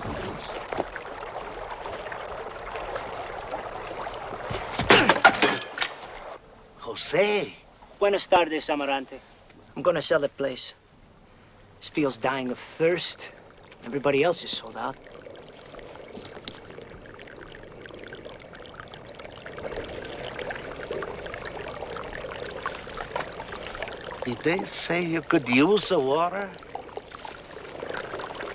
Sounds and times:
Water: 0:00.0 - 0:28.5.

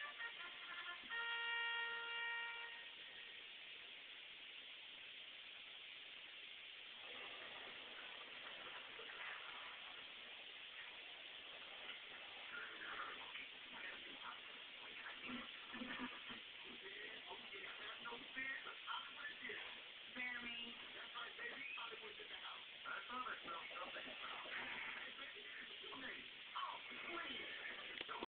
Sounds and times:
Speech: 0:12.5 - 0:28.2.

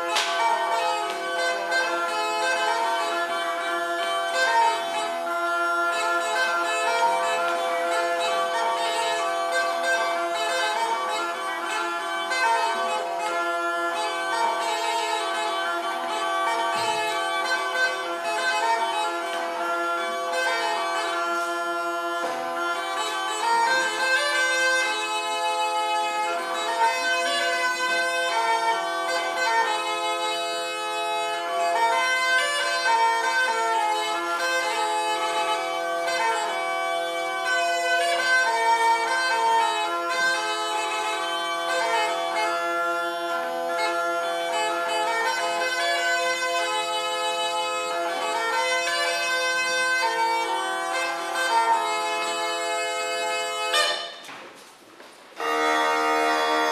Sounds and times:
Bagpipes: 0:00.0 - 0:56.7.

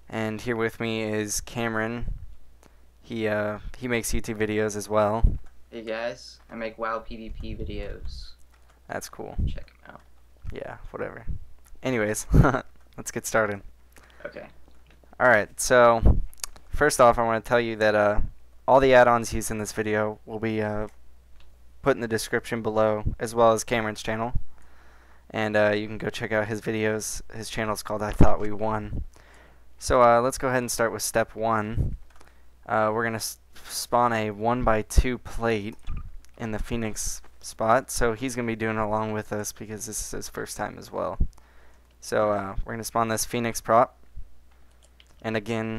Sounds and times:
Speech: 0:00.1 - 0:02.1, 0:05.8 - 0:12.3, 0:16.8 - 0:20.9, 0:25.3 - 0:29.0, 0:29.8 - 0:31.9, 0:36.4 - 0:41.2, 0:42.0 - 0:44.0, 0:45.2 - 0:45.7.

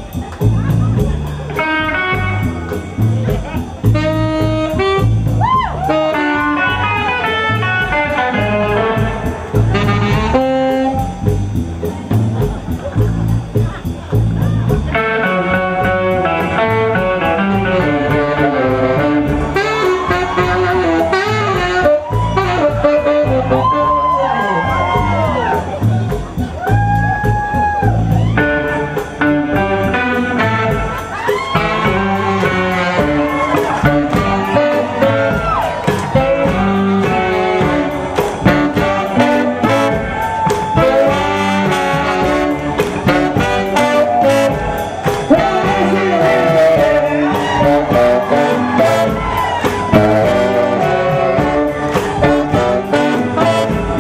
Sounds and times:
Music: 0:00.0 - 0:54.0.

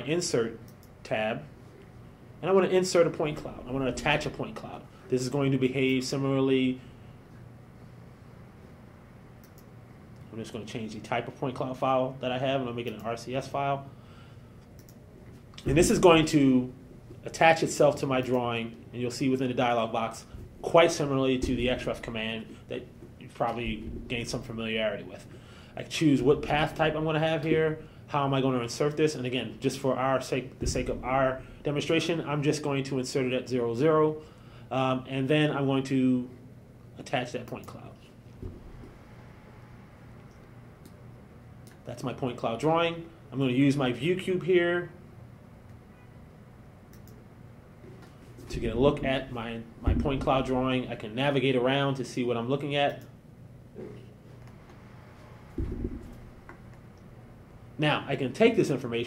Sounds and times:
Speech: 0:00.0 - 0:01.5, 0:02.4 - 0:06.8, 0:10.3 - 0:13.9, 0:15.6 - 0:36.4, 0:37.0 - 0:38.1, 0:41.9 - 0:45.0, 0:48.5 - 0:53.1, 0:57.8 - 0:59.0.

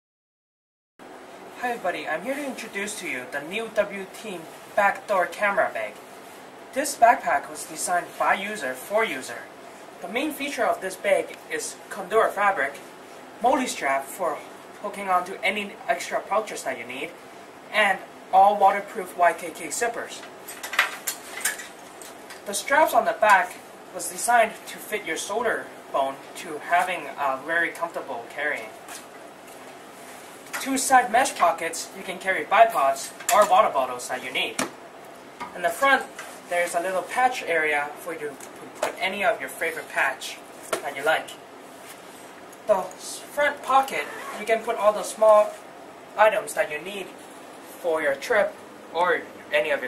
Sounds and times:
Speech: 0:01.6 - 0:06.0, 0:06.7 - 0:20.3, 0:22.5 - 0:28.8, 0:30.6 - 0:34.7, 0:35.5 - 0:41.4, 0:42.6 - 0:45.6, 0:46.2 - 0:47.2, 0:47.8 - 0:49.8.

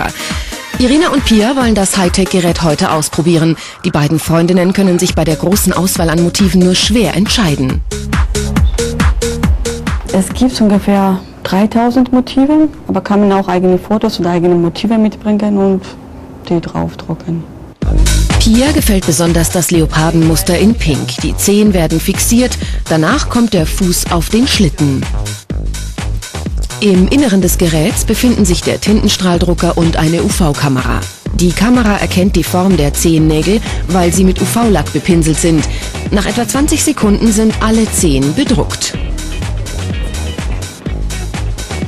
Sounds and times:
Music: 0:00.0 - 0:12.5, 0:17.7 - 0:41.8
Speech: 0:00.8 - 0:07.8, 0:10.1 - 0:17.5, 0:18.4 - 0:25.1, 0:26.7 - 0:39.0.

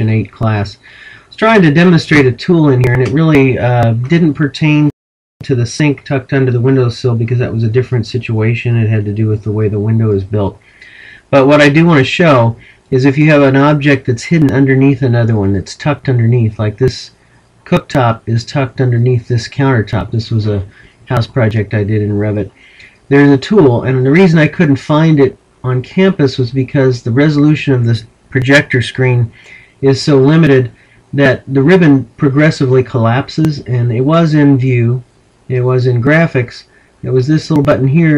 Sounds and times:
Speech: 0:00.0 - 0:38.1.

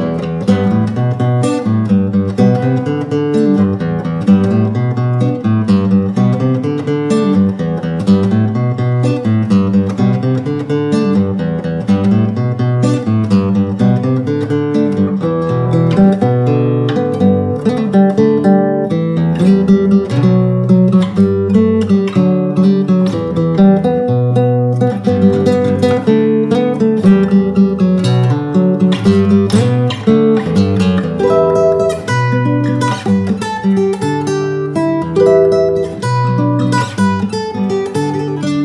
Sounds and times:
Acoustic guitar: 0:00.0 - 0:38.6.

